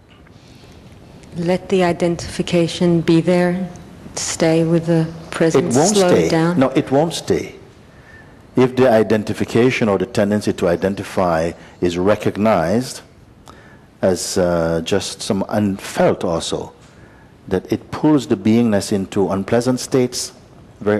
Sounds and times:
Speech: 1.4 - 7.7, 8.6 - 13.1, 17.5 - 20.9.

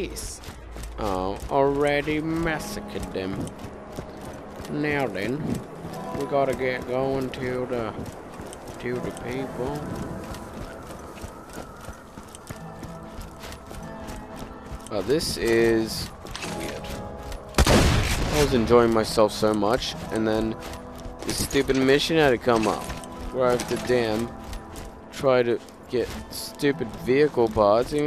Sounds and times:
Speech: 0.0 - 0.4, 1.0 - 3.4, 4.7 - 5.4, 6.2 - 8.0, 8.8 - 9.9, 14.9 - 16.9, 18.3 - 20.6, 21.3 - 24.3, 25.2 - 28.0.

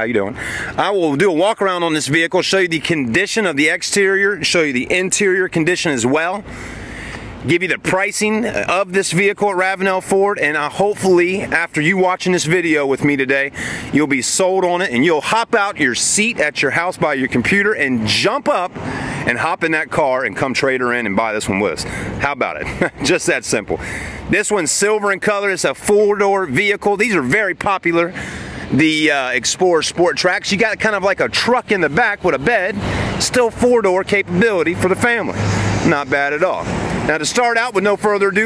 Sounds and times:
Speech: 0.0 - 6.5, 7.4 - 38.4.

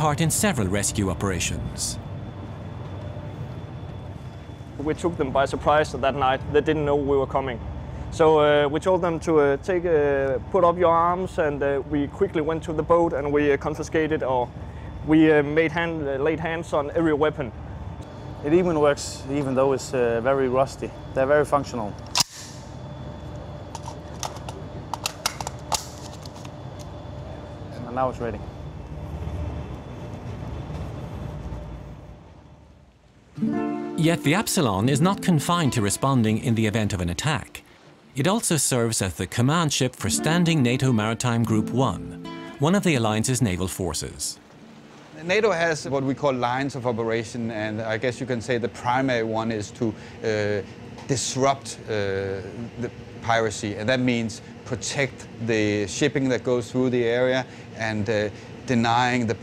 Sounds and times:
Speech: 0.0 - 2.0, 4.8 - 7.6, 8.2 - 14.5, 15.1 - 17.5, 18.5 - 22.0, 34.0 - 37.6, 38.2 - 44.4, 45.2 - 59.4.

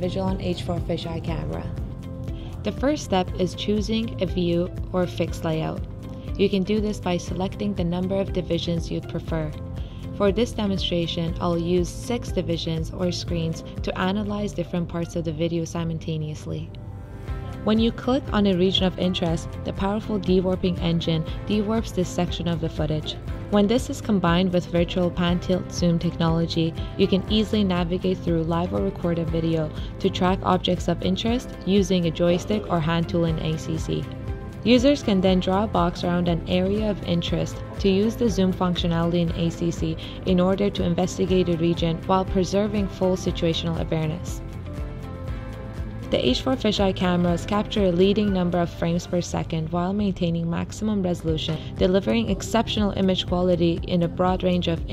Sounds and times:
Speech: 0.0 - 1.8, 2.7 - 5.8, 6.4 - 9.6, 10.2 - 16.7, 17.7 - 34.0, 34.7 - 44.4, 46.1 - 54.9
Music: 0.0 - 54.9.

